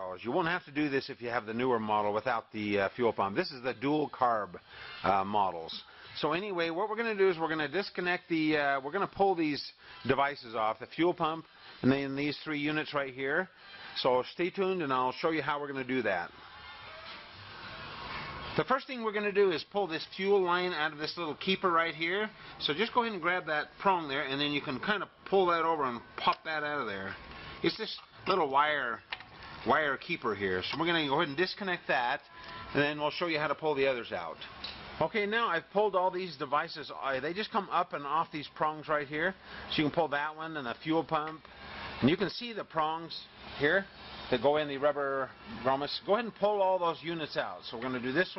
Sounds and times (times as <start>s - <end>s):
Speech: 0.0s - 16.3s, 18.6s - 29.0s, 29.6s - 41.4s, 42.0s - 48.3s.